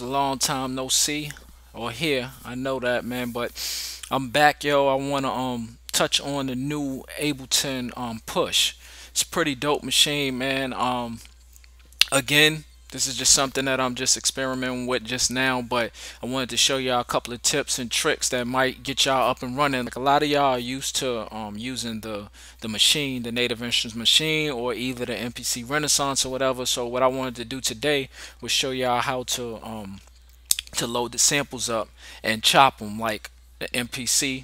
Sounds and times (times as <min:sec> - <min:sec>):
Speech: 0:00.0 - 0:11.3, 0:12.0 - 0:30.1, 0:30.7 - 0:34.4.